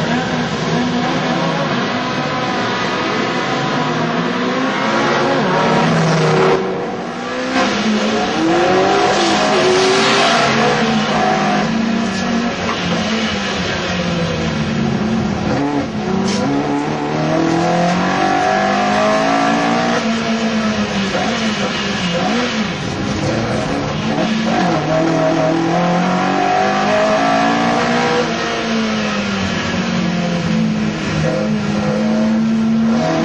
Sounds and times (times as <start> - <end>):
Car: 0.0 - 33.2.